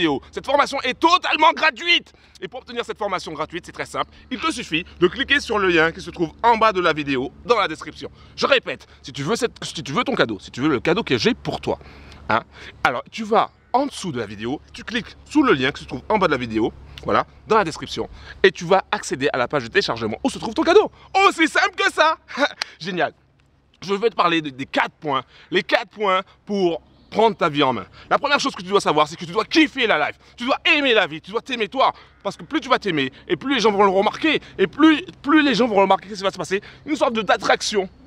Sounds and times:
Speech: 0.0 - 23.2, 23.8 - 37.9.

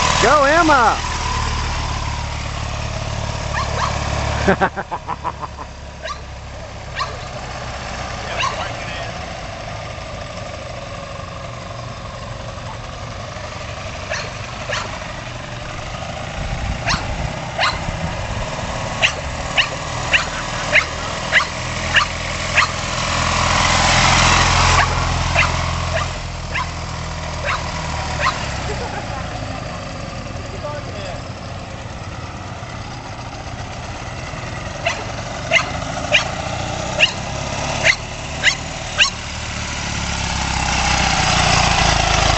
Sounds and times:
Motorcycle: 0.0 - 42.3
Speech: 0.2 - 1.0, 30.5 - 31.2
Bow-wow: 3.5 - 4.0, 6.0 - 6.2, 7.0 - 7.3, 8.4 - 8.8, 14.1 - 14.9, 16.8 - 17.8, 19.0 - 22.8, 24.8 - 26.8, 27.4 - 28.4, 34.8 - 36.4, 37.0 - 37.2, 37.8 - 39.2.

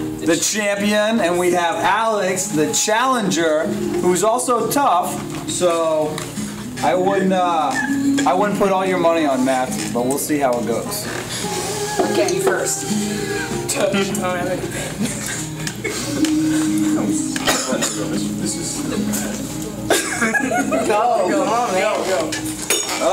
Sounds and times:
Inside, public space: 0.0 - 23.1
Music: 0.0 - 23.1
Speech: 6.8 - 11.1.

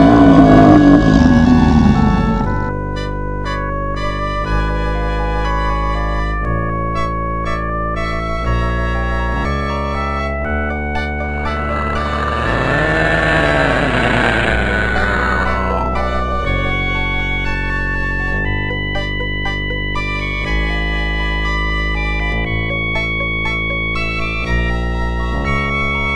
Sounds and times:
Music: 0.0 - 26.1.

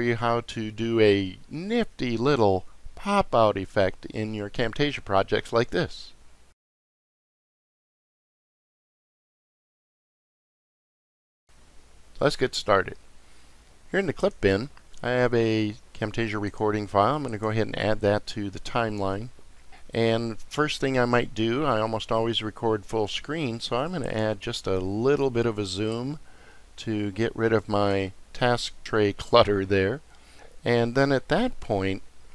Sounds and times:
Speech: 0.0 - 6.2, 12.2 - 13.0, 13.9 - 19.3, 19.9 - 26.2, 26.8 - 32.1.

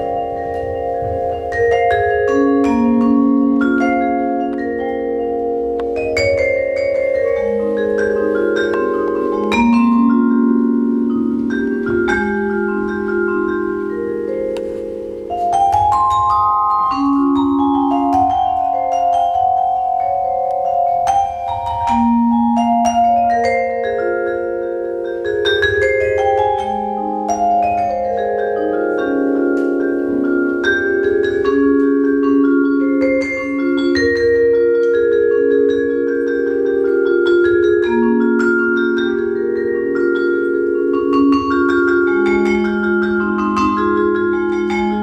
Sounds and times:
Classical music: 0.0 - 45.0
Vibraphone: 0.0 - 45.0.

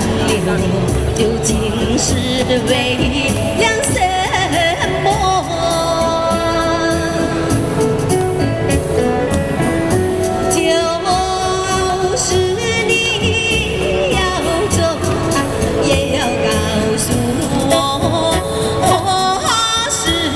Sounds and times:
Female singing: 0.0 - 7.5, 10.5 - 20.3
Music: 0.0 - 20.3.

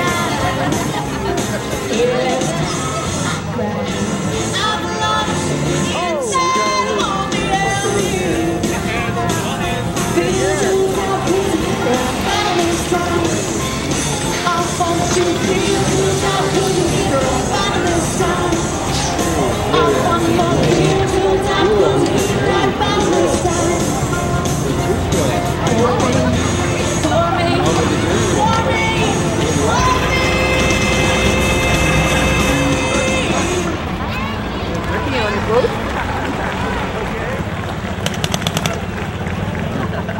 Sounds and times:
Speech: 0.0 - 13.6, 14.3 - 37.5
Music: 0.0 - 38.0
Hubbub, speech noise, speech babble: 0.0 - 40.2
Outside, urban or manmade: 0.0 - 40.2.

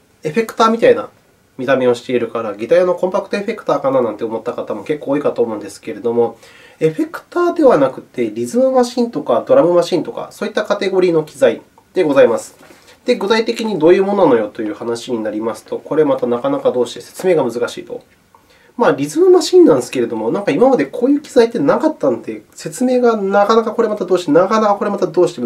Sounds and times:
Speech: 0.2 - 18.1, 18.8 - 25.4.

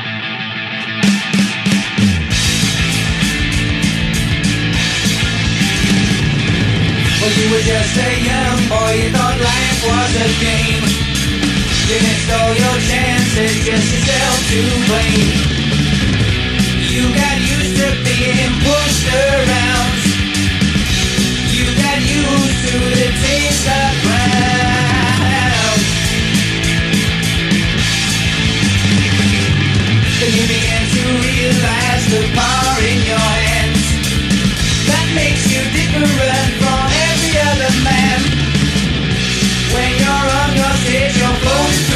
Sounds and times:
Music: 0.0 - 41.9.

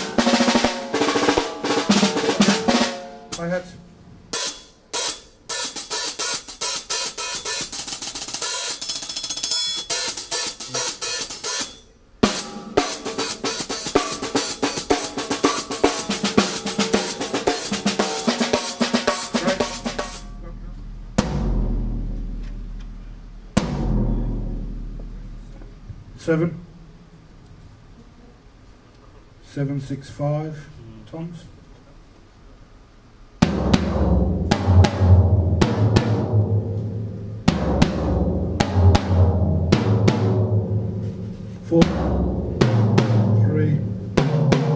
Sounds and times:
Hi-hat: 4.4 - 25.6.

